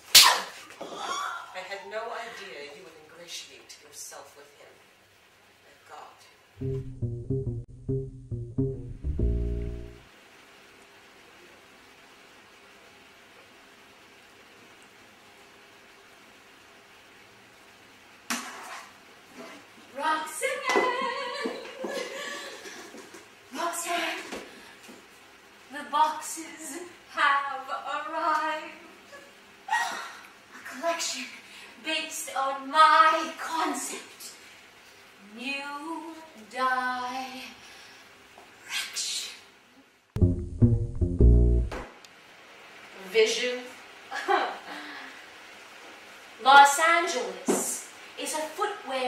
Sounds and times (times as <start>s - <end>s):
Breathing: 24.4s - 25.0s, 31.4s - 31.8s, 37.6s - 38.2s, 44.7s - 45.2s.